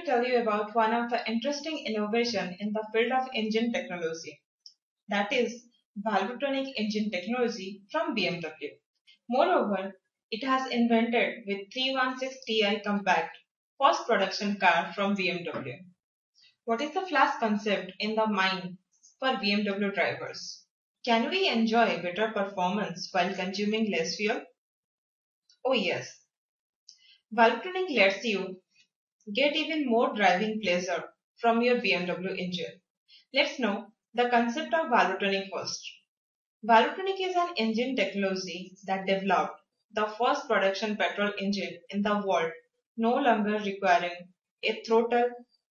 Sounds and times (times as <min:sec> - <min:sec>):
Speech: 0:00.0 - 0:04.4, 0:05.1 - 0:08.7, 0:09.3 - 0:15.8, 0:16.7 - 0:24.4, 0:25.7 - 0:26.1, 0:27.4 - 0:28.6, 0:29.3 - 0:32.7, 0:33.4 - 0:36.0, 0:36.7 - 0:45.3.